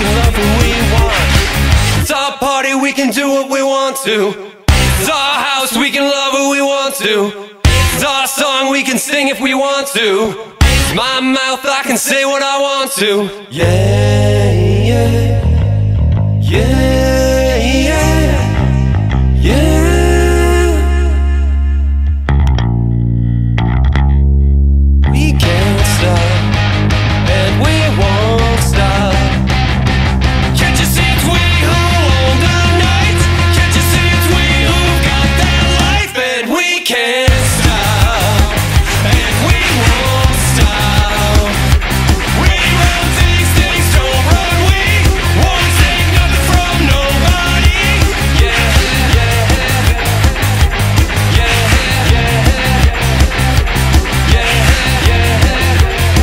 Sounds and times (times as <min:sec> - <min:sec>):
Independent music: 0:00.0 - 0:02.3, 0:04.6 - 0:05.4, 0:07.6 - 0:08.4, 0:10.3 - 0:11.4, 0:13.5 - 0:36.5, 0:37.3 - 0:56.2.